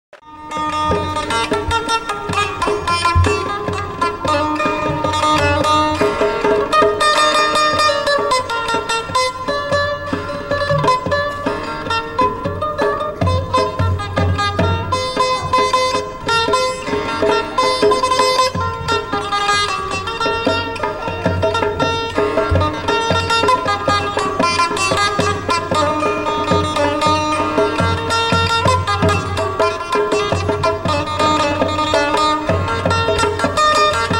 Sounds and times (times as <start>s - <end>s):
Zither: 0.2s - 34.1s.